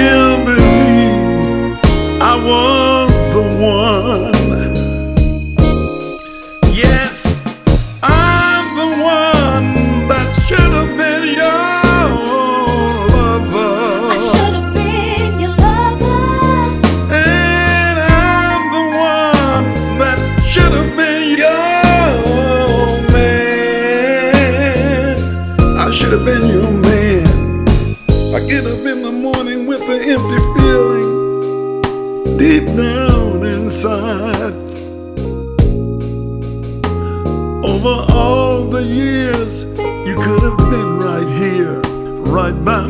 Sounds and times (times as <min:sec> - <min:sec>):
Music: 0:00.0 - 0:42.8.